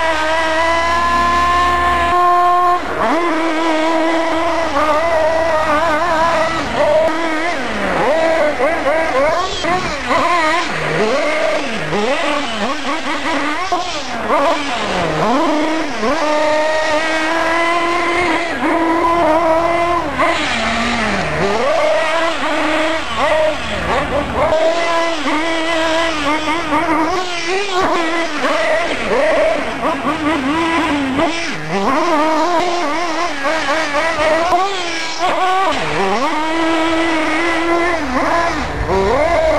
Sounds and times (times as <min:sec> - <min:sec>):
Car: 0:00.0 - 0:39.5.